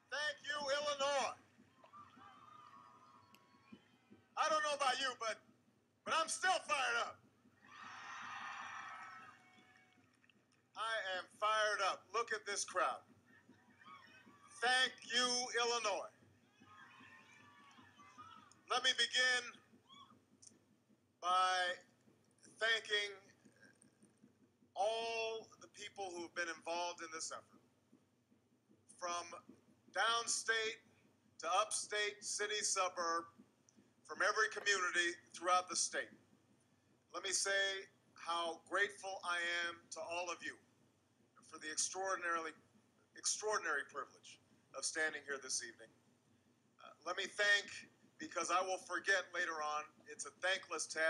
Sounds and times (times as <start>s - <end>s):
Male speech, man speaking: 0.0s - 1.4s, 4.4s - 5.4s, 6.1s - 7.2s, 10.8s - 13.0s, 14.6s - 16.1s, 18.7s - 19.6s, 21.2s - 21.8s, 22.6s - 23.3s, 24.8s - 27.4s, 29.0s - 29.4s, 30.0s - 30.8s, 31.4s - 33.3s, 34.1s - 36.1s, 37.2s - 40.6s, 41.5s - 42.6s, 43.2s - 45.9s, 46.8s - 51.1s
Narration, monologue: 0.0s - 7.8s, 9.3s - 51.1s.